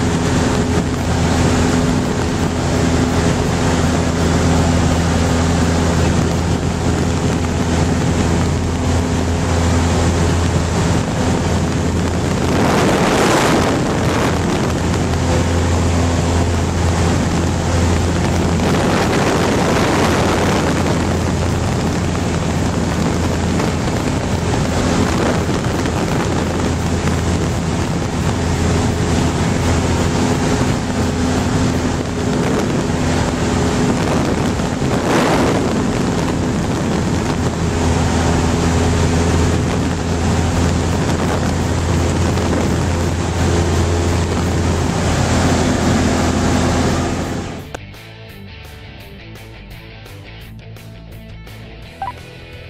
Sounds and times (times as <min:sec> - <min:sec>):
Aircraft: 0:00.0 - 0:52.7.